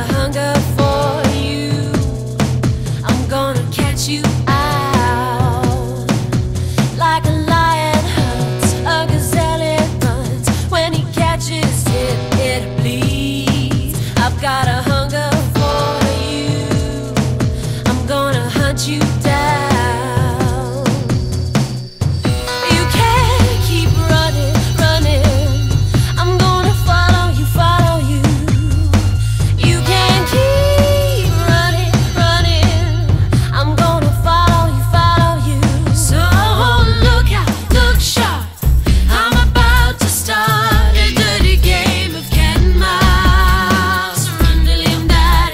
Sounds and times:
Music: 0.0s - 45.5s.

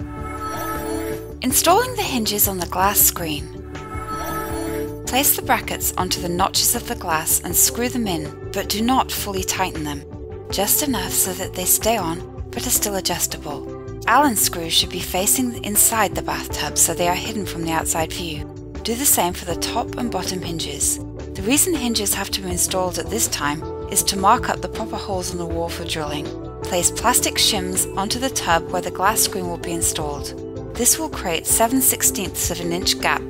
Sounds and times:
Music: 0.0s - 33.2s
Speech: 1.4s - 3.5s, 5.1s - 33.2s.

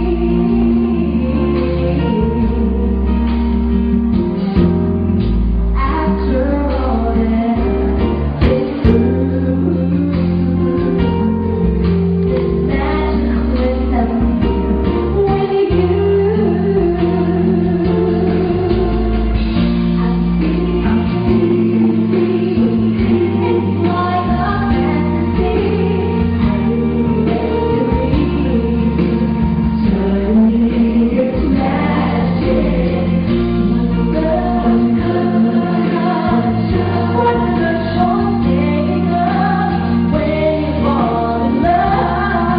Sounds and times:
Vocal music: 0.0s - 42.5s.

